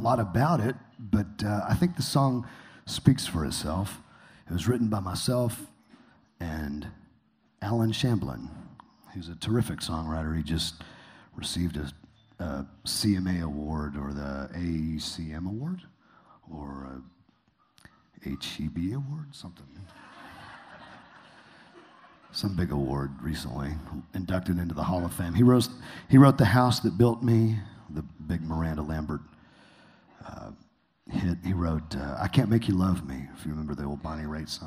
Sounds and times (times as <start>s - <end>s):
Speech: 0.0s - 5.8s, 6.4s - 10.8s, 11.4s - 17.2s, 18.2s - 20.0s, 22.3s - 29.3s, 30.2s - 34.6s.